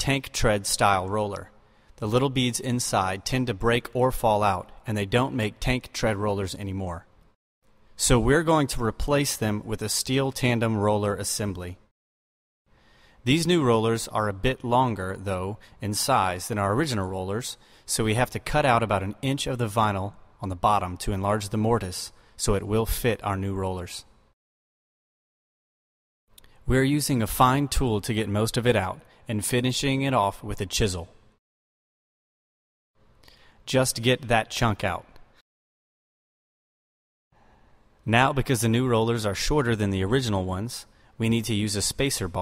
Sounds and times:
Speech: 0:00.0 - 0:07.1, 0:08.0 - 0:11.8, 0:13.2 - 0:24.1, 0:26.7 - 0:31.2, 0:33.7 - 0:35.2, 0:38.1 - 0:42.4.

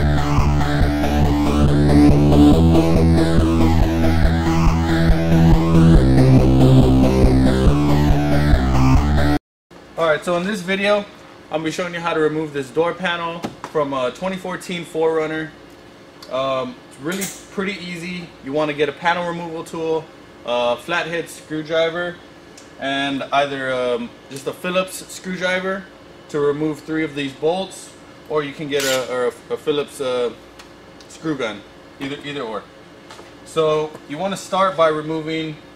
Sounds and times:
Speech: 0:10.0 - 0:15.6, 0:16.3 - 0:22.2, 0:22.8 - 0:30.4, 0:31.1 - 0:32.7, 0:33.5 - 0:35.6.

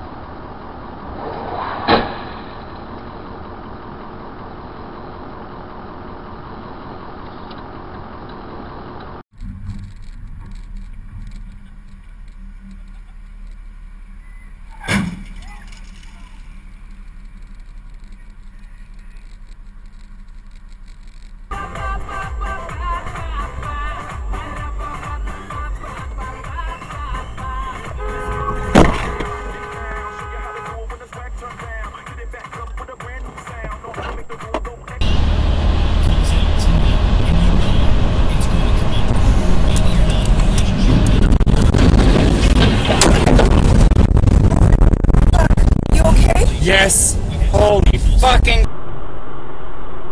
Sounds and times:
Car: 0:00.0 - 0:50.1
Speech: 0:14.8 - 0:16.5, 0:29.7 - 0:35.0, 0:36.0 - 0:41.0, 0:45.4 - 0:48.7.

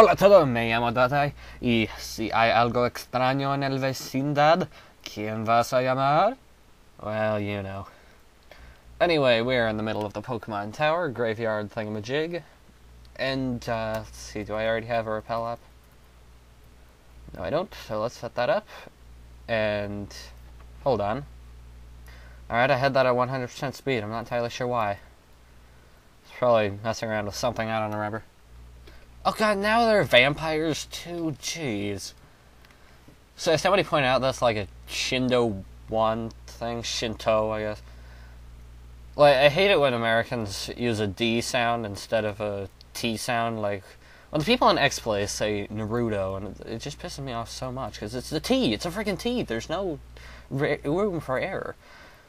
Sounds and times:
Speech: 0:00.0 - 0:06.4, 0:07.0 - 0:08.0, 0:09.0 - 0:12.6, 0:13.2 - 0:15.6, 0:17.3 - 0:18.9, 0:19.5 - 0:21.3, 0:22.5 - 0:25.1, 0:26.3 - 0:28.3, 0:29.2 - 0:32.2, 0:33.4 - 0:37.8, 0:39.2 - 0:51.8.

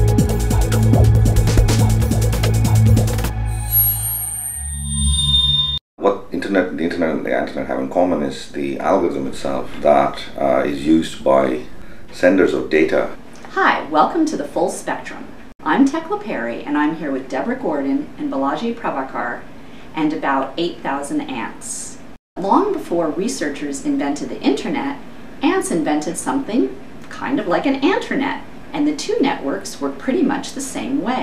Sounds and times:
Speech: 0:06.0 - 0:19.4, 0:20.0 - 0:31.2.

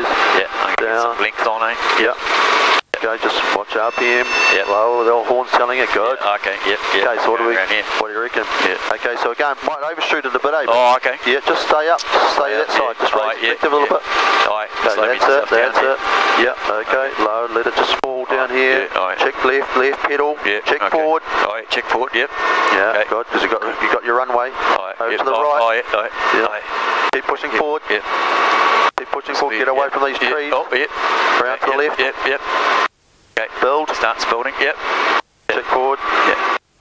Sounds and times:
Speech: 0:00.0 - 0:02.2, 0:02.9 - 0:28.1, 0:29.0 - 0:32.4, 0:33.4 - 0:34.8, 0:35.5 - 0:36.6.

